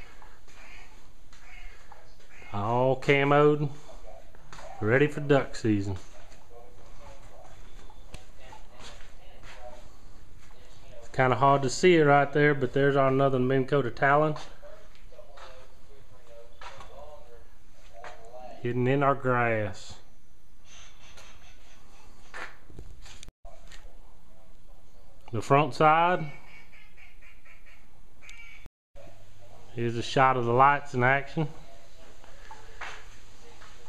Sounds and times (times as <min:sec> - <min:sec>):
Speech: 0:02.5 - 0:09.9, 0:10.5 - 0:20.0, 0:23.5 - 0:26.3, 0:29.0 - 0:32.6.